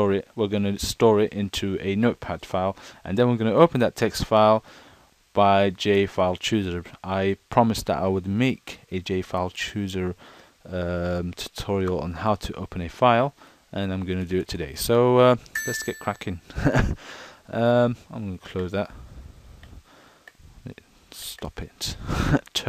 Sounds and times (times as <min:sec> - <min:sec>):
Speech: 0:00.0 - 0:04.6, 0:05.4 - 0:16.4, 0:17.5 - 0:19.0, 0:20.7 - 0:22.6.